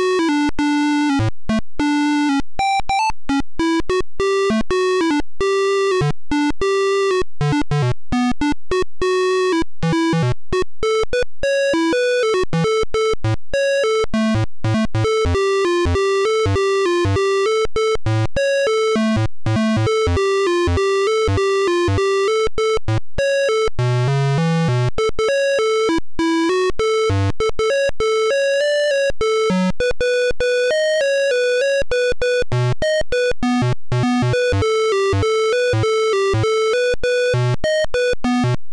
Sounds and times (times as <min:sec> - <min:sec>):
Music: 0:00.0 - 0:38.7.